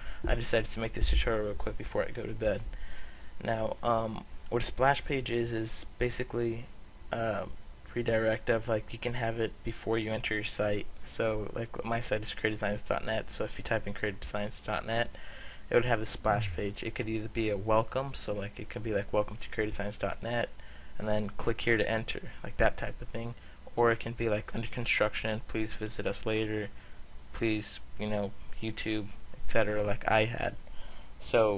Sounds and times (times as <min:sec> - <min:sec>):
Speech: 0:00.3 - 0:02.7, 0:03.4 - 0:30.6, 0:31.2 - 0:31.5.